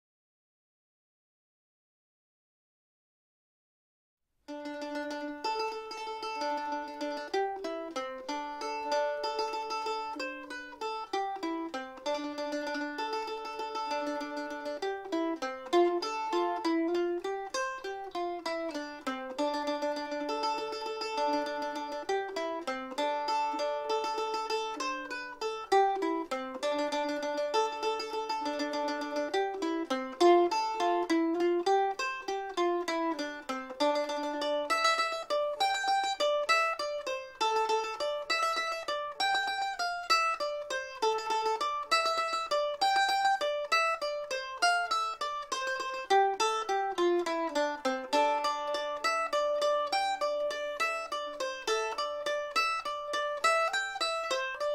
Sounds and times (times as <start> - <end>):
Mandolin: 4.5 - 54.7.